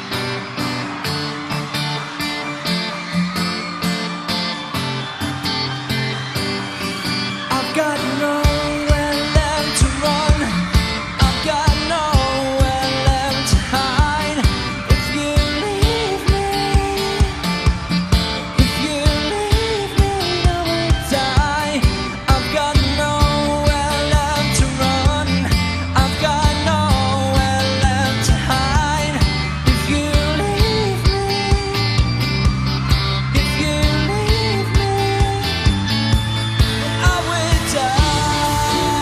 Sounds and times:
Music: 0:00.0 - 0:39.0.

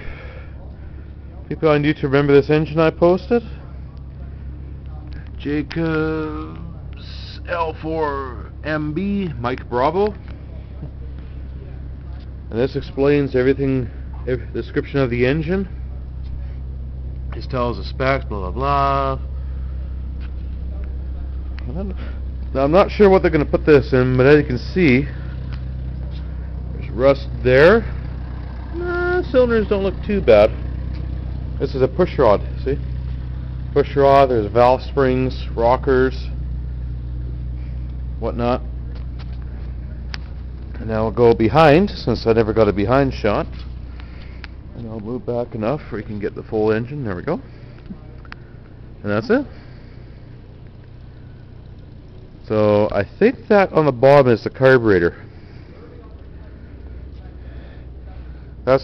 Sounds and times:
Idling: 0:00.0 - 0:58.8
Speech: 0:00.6 - 0:16.6, 0:17.3 - 0:19.3, 0:20.6 - 0:25.2, 0:26.0 - 0:28.0, 0:28.7 - 0:30.6, 0:31.6 - 0:32.8, 0:33.7 - 0:36.4, 0:38.2 - 0:38.7, 0:40.8 - 0:43.6, 0:44.8 - 0:48.2, 0:49.0 - 0:49.6, 0:52.4 - 0:58.8.

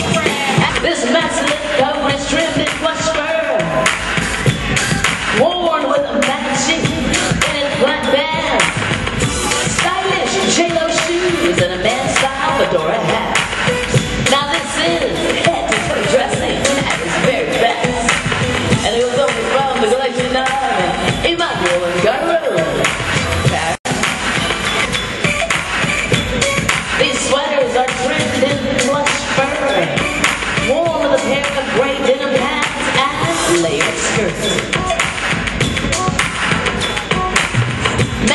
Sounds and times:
Speech: 0:00.0 - 0:03.8, 0:05.4 - 0:08.7, 0:09.8 - 0:13.4, 0:14.3 - 0:18.2, 0:18.8 - 0:22.9, 0:27.0 - 0:30.0, 0:30.7 - 0:34.8
Music: 0:00.0 - 0:38.3.

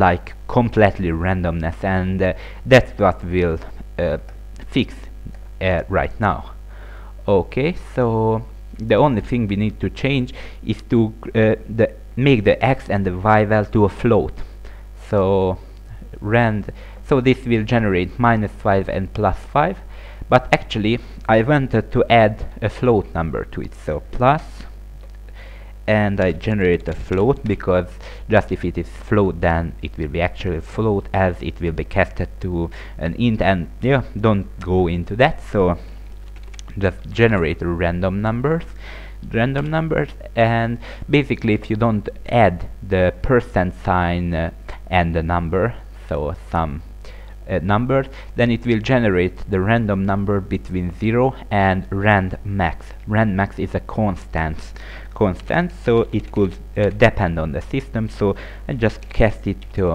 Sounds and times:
Speech: 0:00.0 - 0:06.6, 0:07.2 - 0:24.8, 0:25.9 - 0:35.9, 0:36.6 - 0:46.9, 0:47.5 - 0:59.9.

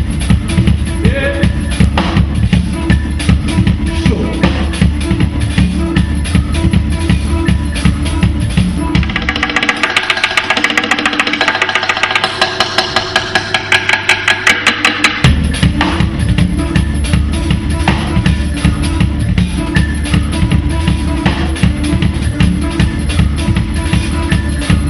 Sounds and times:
Music: 0:00.0 - 0:24.8.

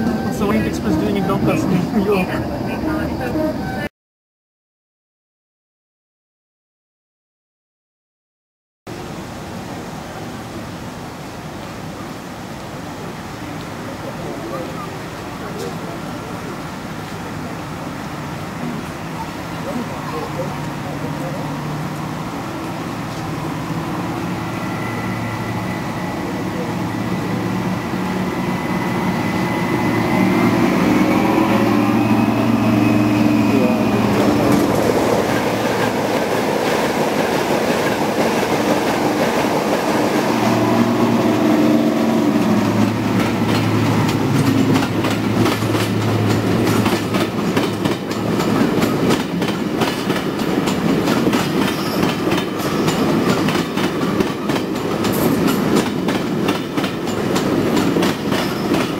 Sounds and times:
Train: 0:00.0 - 0:03.9, 0:08.9 - 0:58.9.

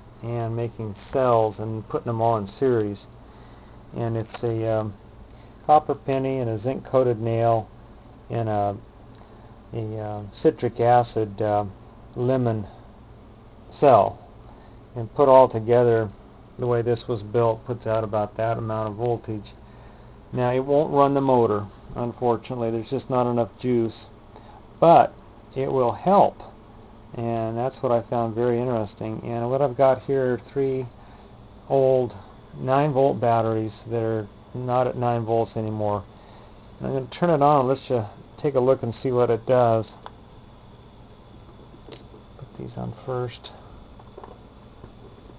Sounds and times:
Speech: 0:00.2 - 0:03.1, 0:03.9 - 0:05.0, 0:05.7 - 0:07.7, 0:08.3 - 0:08.8, 0:09.7 - 0:12.8, 0:13.7 - 0:14.2, 0:15.0 - 0:19.6, 0:20.3 - 0:24.1, 0:24.8 - 0:30.9, 0:31.7 - 0:36.1, 0:36.8 - 0:40.0, 0:42.4 - 0:43.6.

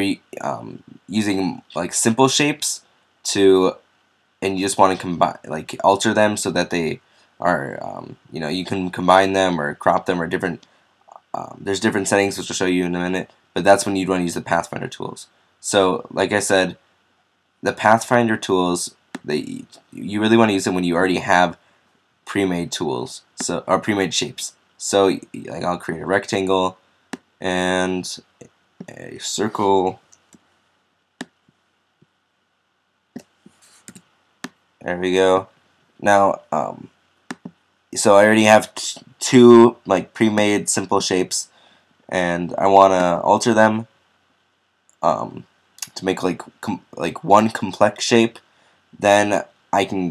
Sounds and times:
Speech: 0:00.0 - 0:03.8, 0:04.4 - 0:16.8, 0:17.6 - 0:21.6, 0:22.3 - 0:26.8, 0:27.4 - 0:30.0, 0:34.8 - 0:36.9, 0:38.0 - 0:41.5, 0:42.1 - 0:43.9, 0:45.0 - 0:48.4, 0:49.0 - 0:50.1.

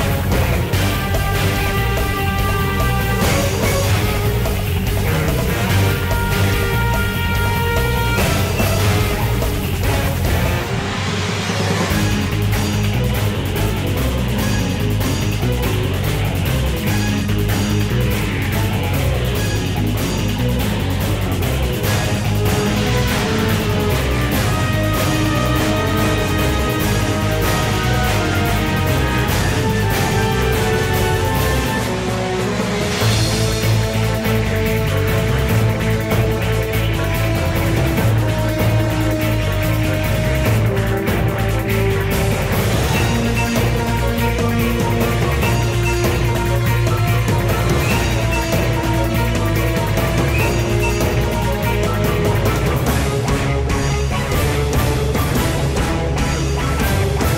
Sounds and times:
Music: 0:00.0 - 0:57.3.

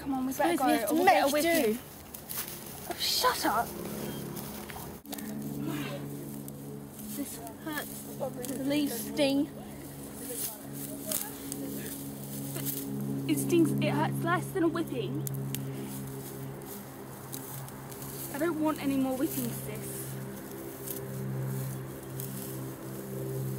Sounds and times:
Outside, rural or natural: 0:00.0 - 0:23.5.

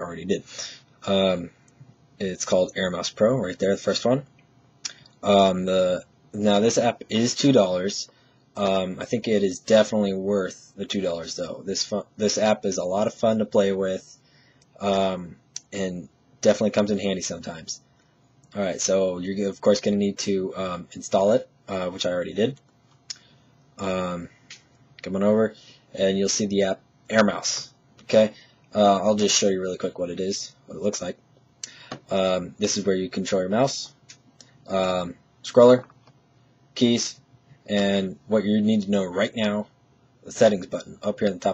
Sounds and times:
Speech: 0:00.0 - 0:01.6, 0:02.2 - 0:04.3, 0:05.2 - 0:14.2, 0:14.8 - 0:17.9, 0:18.5 - 0:22.6, 0:23.8 - 0:24.4, 0:25.0 - 0:31.2, 0:32.0 - 0:35.9, 0:36.8 - 0:41.5.

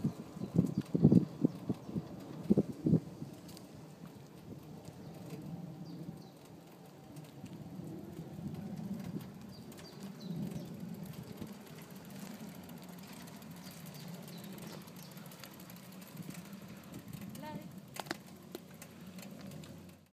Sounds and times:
Bicycle: 0:00.0 - 0:20.1.

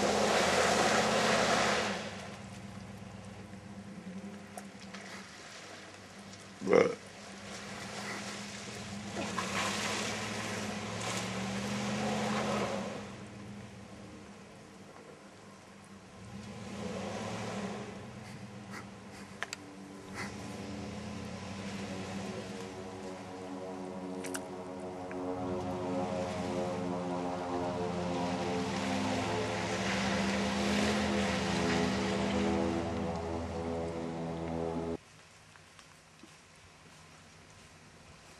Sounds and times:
Truck: 0:00.0 - 0:05.8, 0:07.4 - 0:24.1, 0:25.1 - 0:35.0
Outside, rural or natural: 0:00.0 - 0:38.3.

